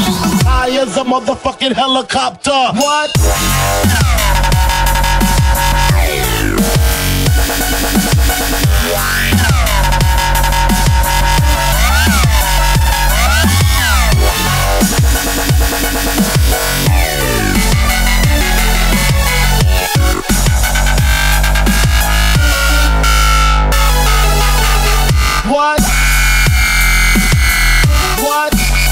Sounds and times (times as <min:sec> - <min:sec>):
Electronica: 0:02.8 - 0:28.9.